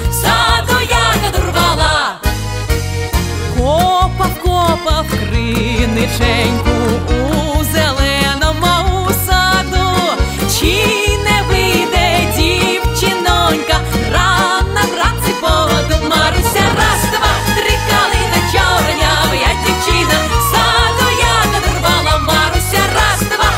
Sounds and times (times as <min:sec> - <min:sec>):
Music: 0:00.0 - 0:23.5.